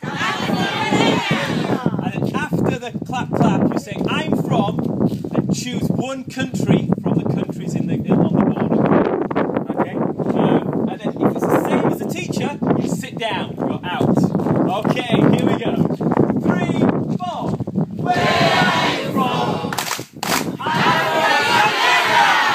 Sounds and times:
Speech: 1.8 - 4.8, 5.5 - 8.8, 9.7 - 17.6.

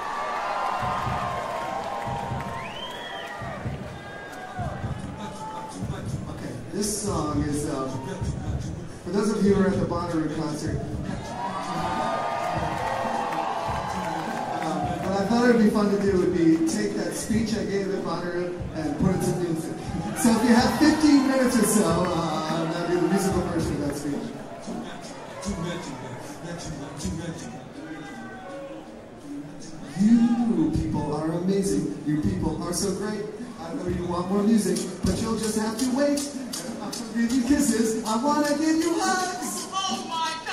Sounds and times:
Music: 0.0 - 40.5
Male speech, man speaking: 5.2 - 12.2, 14.6 - 28.8, 29.4 - 40.5.

